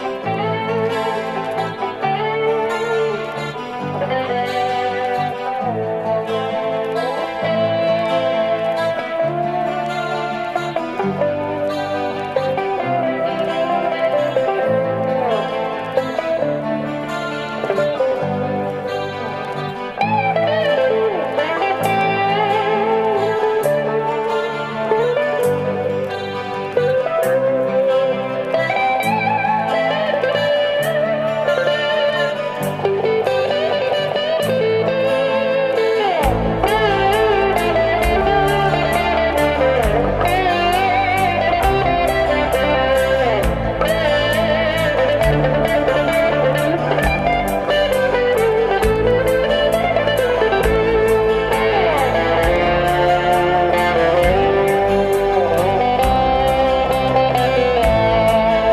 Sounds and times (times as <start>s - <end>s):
Rock music: 0.0s - 58.7s.